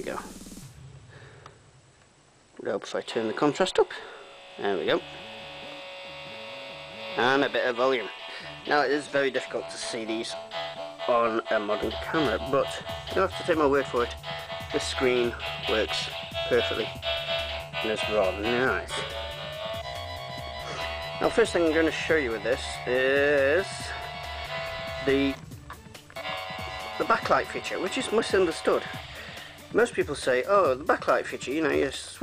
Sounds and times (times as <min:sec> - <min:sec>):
Speech: 0:00.0 - 0:00.2, 0:02.6 - 0:05.0, 0:07.2 - 0:10.4, 0:11.1 - 0:17.0, 0:17.8 - 0:19.0, 0:21.2 - 0:24.0, 0:25.0 - 0:25.4, 0:27.0 - 0:29.0, 0:29.7 - 0:32.2
Music: 0:00.0 - 0:00.8, 0:02.8 - 0:32.2.